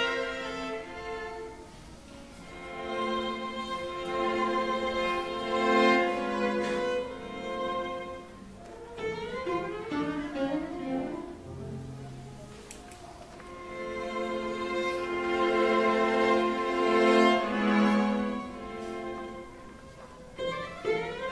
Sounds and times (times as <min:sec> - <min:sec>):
Cello: 0:00.0 - 0:21.3
Classical music: 0:00.0 - 0:21.3
String section: 0:00.0 - 0:21.3
Violin, fiddle: 0:00.0 - 0:21.3.